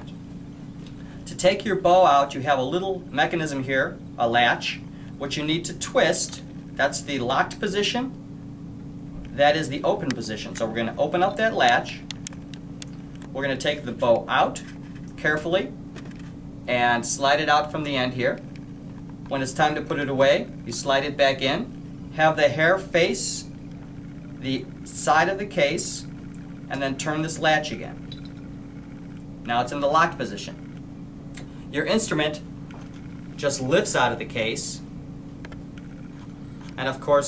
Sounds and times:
Speech: 1.3 - 8.2, 9.4 - 12.0, 13.4 - 15.8, 16.7 - 18.4, 19.3 - 23.5, 24.4 - 26.1, 26.7 - 28.0, 29.5 - 30.6, 31.8 - 32.4, 33.4 - 34.9, 36.8 - 37.2.

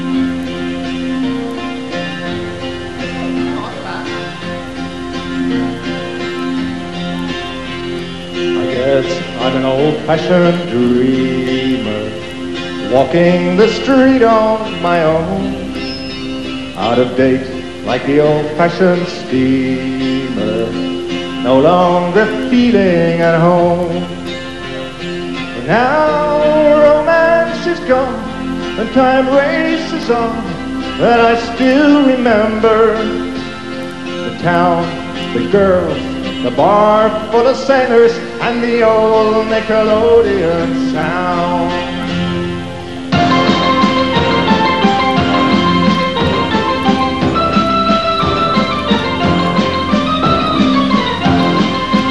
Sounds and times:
Music: 0.0 - 52.1.

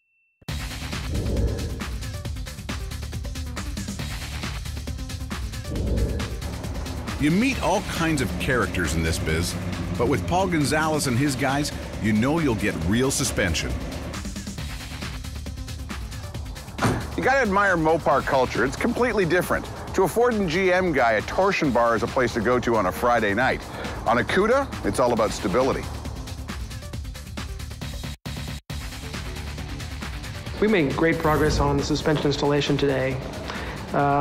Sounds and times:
Music: 0.4 - 34.2
Speech: 7.2 - 13.8, 17.2 - 25.9, 30.5 - 33.2, 33.9 - 34.2.

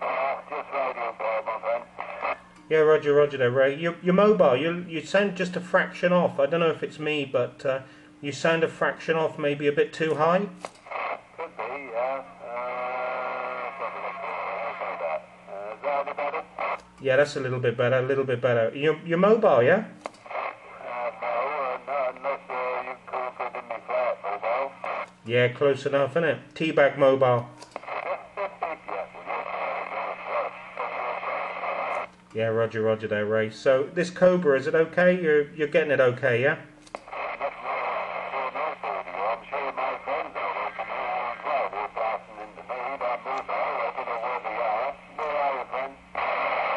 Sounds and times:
Speech: 0.0 - 10.6, 11.4 - 20.0, 20.6 - 46.7
Radio: 0.0 - 36.2, 36.9 - 46.7.

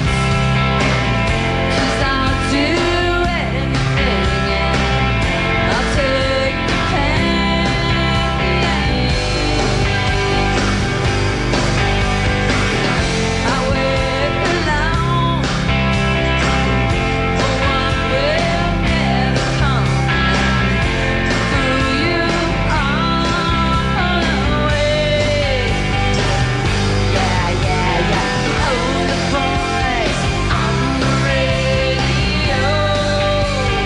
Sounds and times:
Music: 0.0 - 33.8.

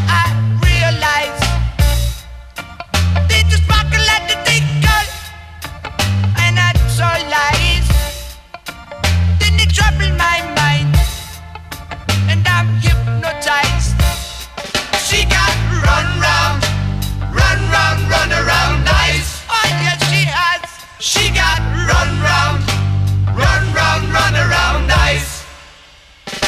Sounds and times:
Music: 0.0 - 26.4.

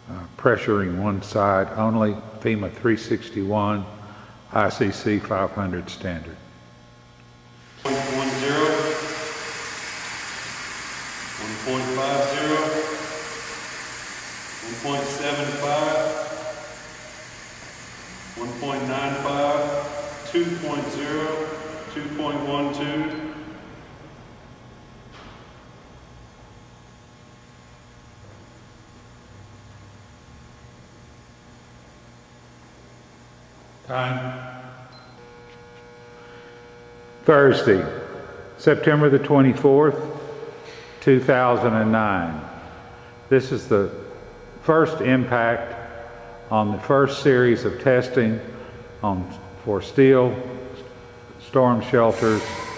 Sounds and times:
Speech: 0.1 - 6.5, 7.9 - 9.2, 11.4 - 13.1, 14.6 - 16.4, 18.4 - 23.4, 33.8 - 34.7, 37.2 - 40.3, 41.0 - 42.6, 43.3 - 45.9, 46.5 - 50.8, 51.4 - 52.6.

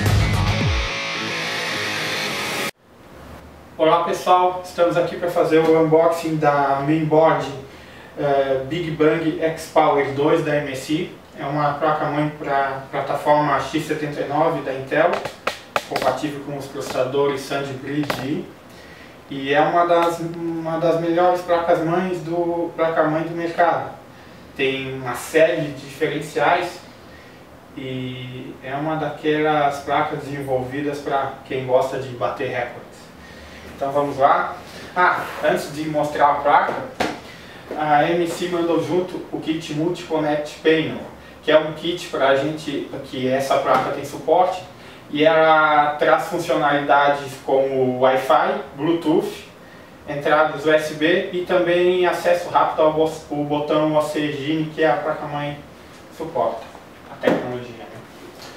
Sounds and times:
Speech: 3.8 - 18.6, 19.3 - 24.0, 24.6 - 26.9, 27.8 - 33.2, 33.8 - 58.1.

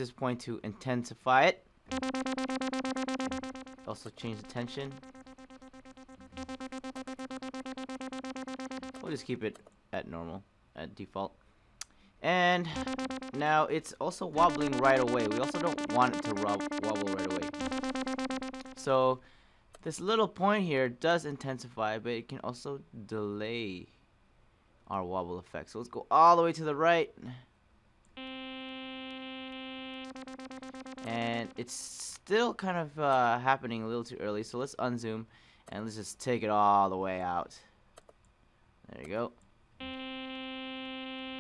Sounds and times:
Speech: 0.0 - 1.6, 3.8 - 5.0, 9.0 - 11.4, 12.2 - 17.6, 18.8 - 19.2, 19.8 - 23.9, 24.9 - 27.4, 31.1 - 37.7, 38.9 - 39.4
Synthesizer: 1.9 - 9.3, 12.7 - 13.7, 14.3 - 19.0, 28.2 - 31.8.

